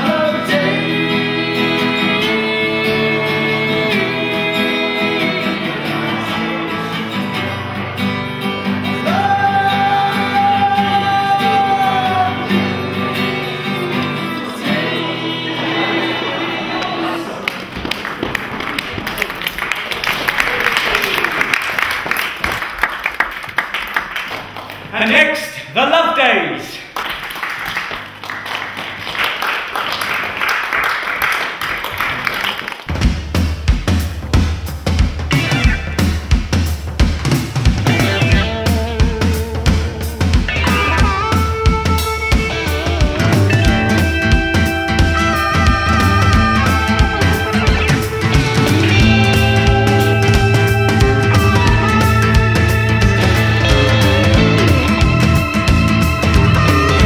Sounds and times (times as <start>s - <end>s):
Music: 0.0s - 18.2s, 32.9s - 57.0s
Speech: 24.9s - 26.9s.